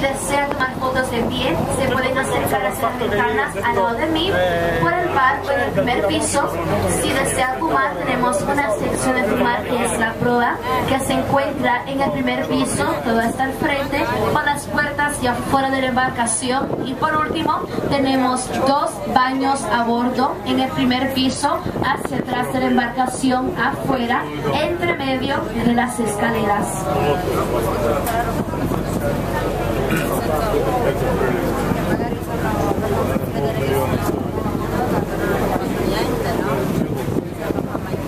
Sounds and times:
Speech: 0.0 - 38.0.

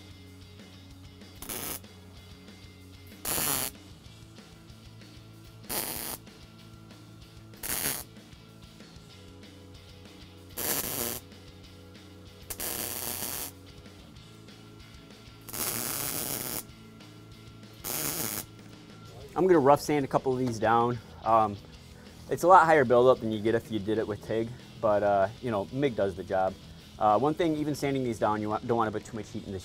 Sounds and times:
Speech: 19.2 - 21.6, 22.3 - 29.6.

